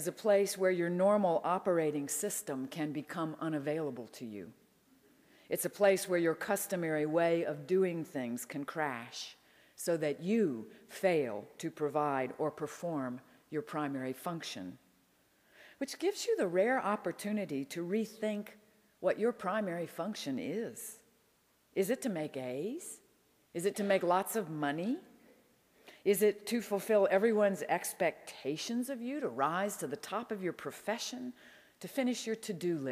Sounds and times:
Speech: 0:00.0 - 0:04.5, 0:21.8 - 0:23.0, 0:23.6 - 0:25.1.

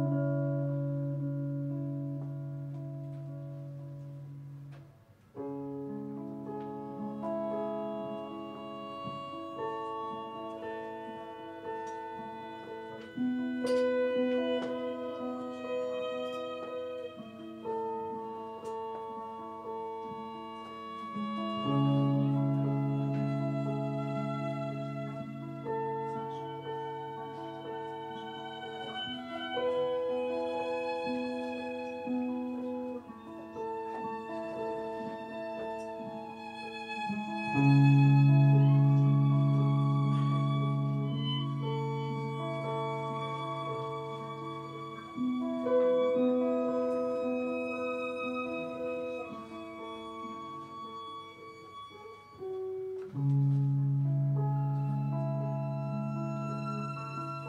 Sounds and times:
Violin, fiddle: 0:00.0 - 0:04.8, 0:05.4 - 0:57.4.

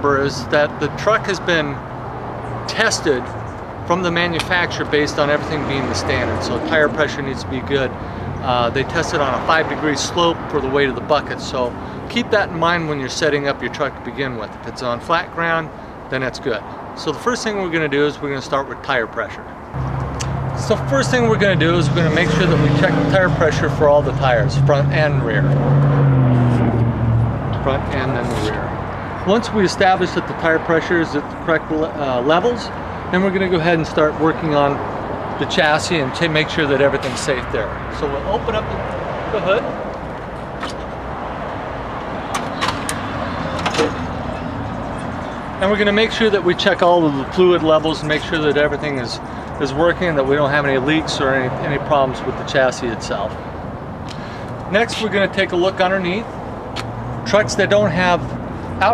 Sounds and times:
Speech: 0:00.0 - 0:01.8, 0:02.7 - 0:03.3, 0:03.9 - 0:19.5, 0:20.6 - 0:25.5, 0:27.6 - 0:34.8, 0:35.4 - 0:39.7, 0:45.6 - 0:53.4, 0:54.7 - 0:56.3, 0:57.2 - 0:58.9.

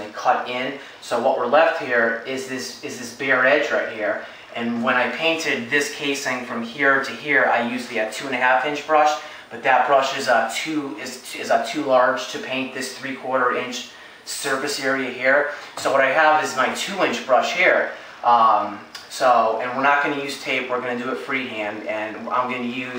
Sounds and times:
Speech: 0:00.0 - 0:22.9.

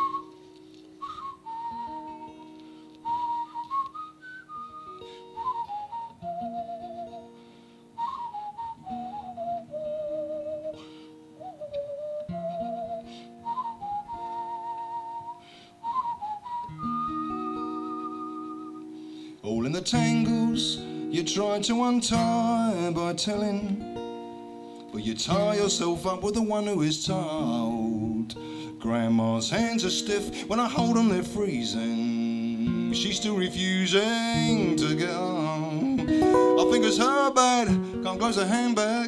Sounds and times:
Music: 0:00.0 - 0:39.0.

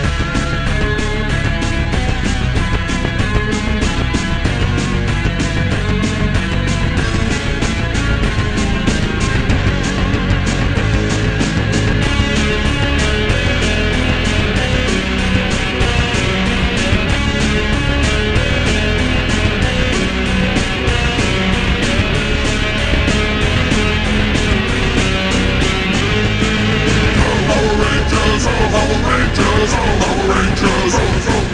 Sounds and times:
Heavy metal: 0:00.0 - 0:31.5
Psychedelic rock: 0:00.0 - 0:31.5
Punk rock: 0:00.0 - 0:31.5.

